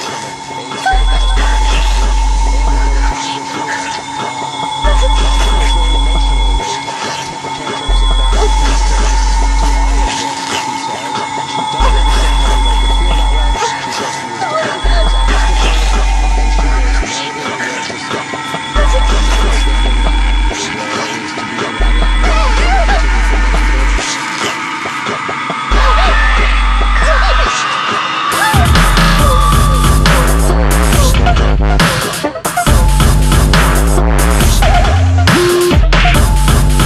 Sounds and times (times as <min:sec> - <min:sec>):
Dubstep: 0:00.0 - 0:36.8.